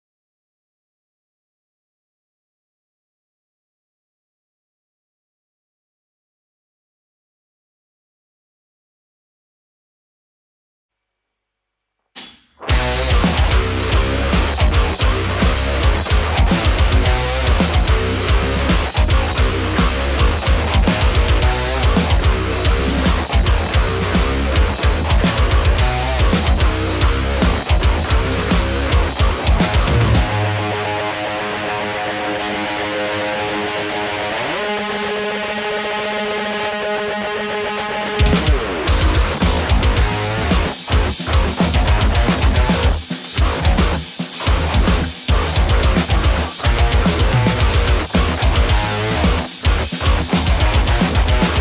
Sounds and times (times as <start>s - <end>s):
Music: 12.0s - 51.6s.